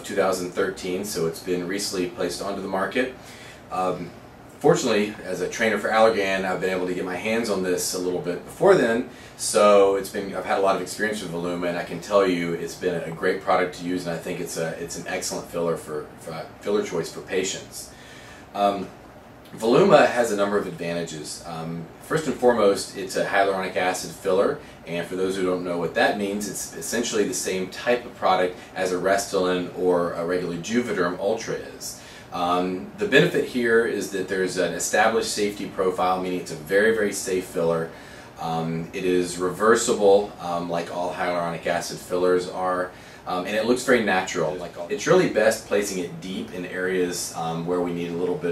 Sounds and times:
Speech: 0:00.0 - 0:48.5.

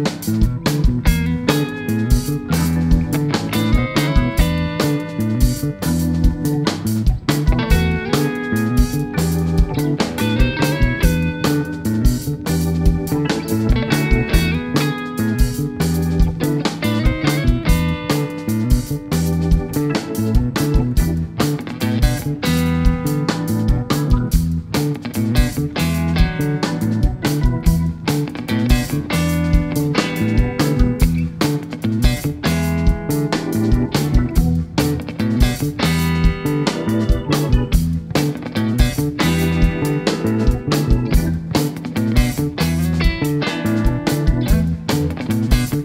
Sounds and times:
Jazz: 0:00.0 - 0:45.8.

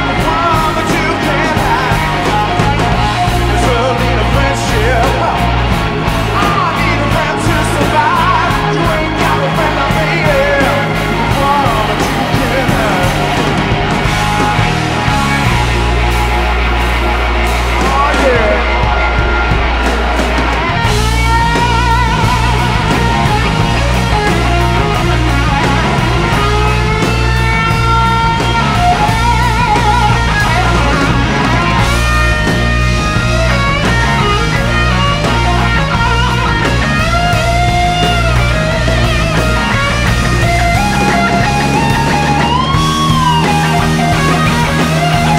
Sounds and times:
Music: 0:00.0 - 0:45.3.

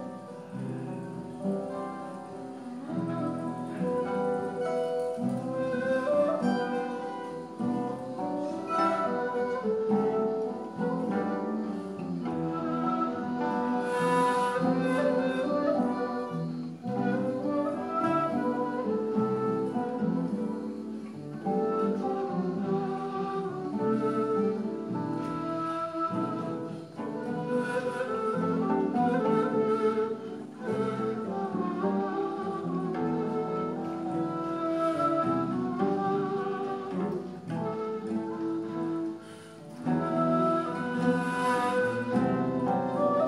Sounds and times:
Acoustic guitar: 0:00.0 - 0:43.2.

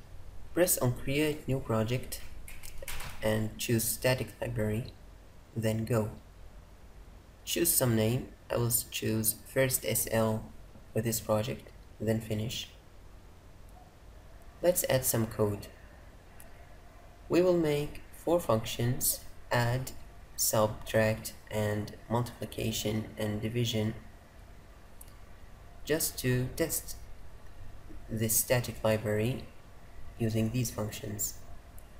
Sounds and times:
Speech: 0:00.6 - 0:02.3, 0:03.2 - 0:05.0, 0:05.6 - 0:06.2, 0:07.5 - 0:12.8, 0:14.6 - 0:15.8, 0:17.3 - 0:24.1, 0:25.9 - 0:27.0, 0:28.1 - 0:29.5, 0:30.2 - 0:31.4.

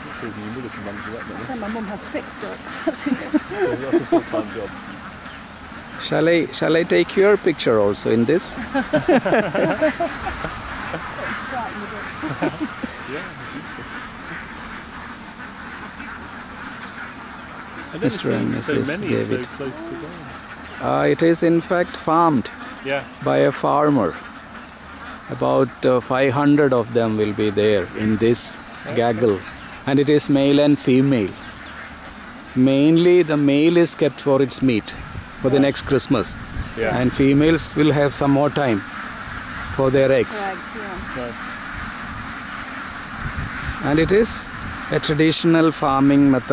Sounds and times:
Quack: 0:00.0 - 0:46.5
Speech: 0:18.0 - 0:24.2, 0:32.6 - 0:38.8.

